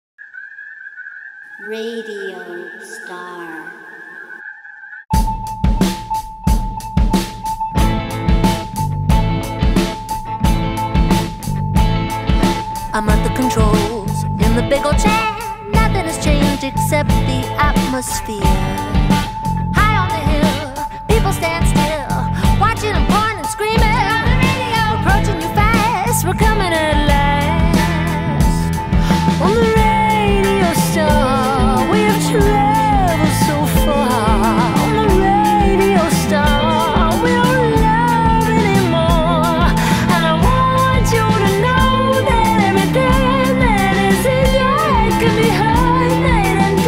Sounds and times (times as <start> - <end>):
Outside, rural or natural: 0.2 - 2.1
Speech: 1.6 - 3.8, 13.0 - 18.7
Music: 5.1 - 46.8.